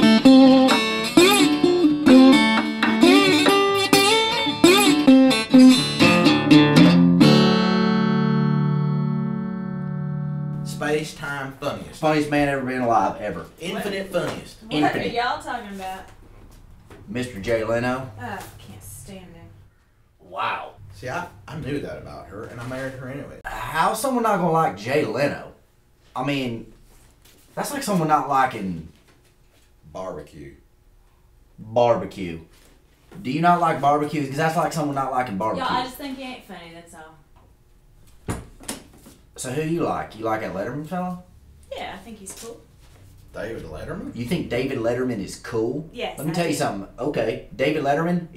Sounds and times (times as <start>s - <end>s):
Speech: 10.7s - 16.0s, 20.3s - 25.5s, 33.2s - 36.5s.